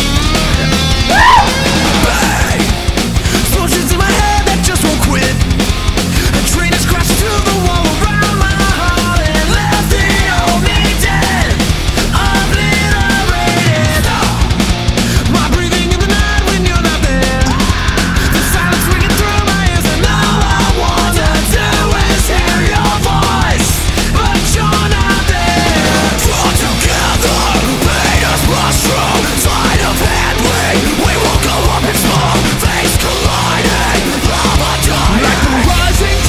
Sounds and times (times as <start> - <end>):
Music: 0.0 - 36.2.